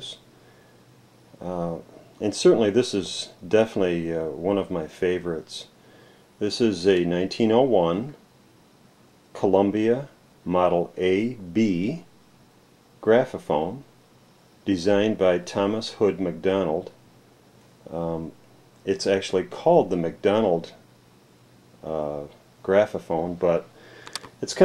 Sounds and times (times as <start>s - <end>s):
Speech: 0.0s - 0.3s, 1.4s - 5.8s, 6.4s - 8.2s, 9.3s - 12.1s, 13.0s - 13.9s, 14.6s - 17.0s, 17.8s - 20.8s, 21.8s - 23.7s, 24.4s - 24.6s.